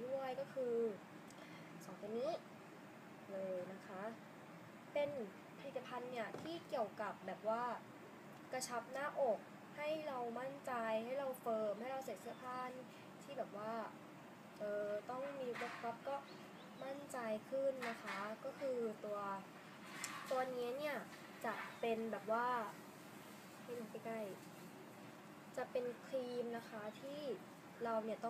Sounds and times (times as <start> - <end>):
Speech: 0.0 - 1.0, 1.8 - 2.5, 3.3 - 4.2, 5.0 - 7.9, 8.5 - 14.0, 14.6 - 19.5, 20.2 - 22.8, 23.7 - 24.4, 25.6 - 28.3.